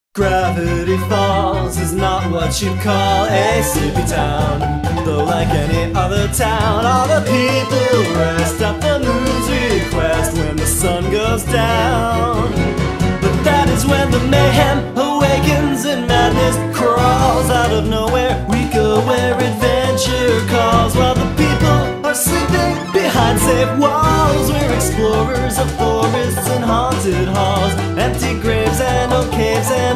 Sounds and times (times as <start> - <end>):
Music: 0.2 - 29.9.